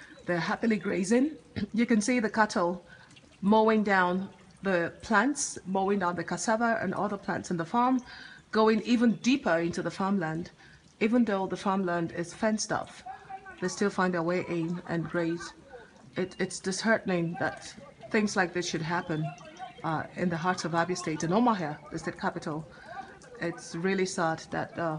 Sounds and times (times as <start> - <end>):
Speech: 0.3 - 2.8, 3.4 - 24.9.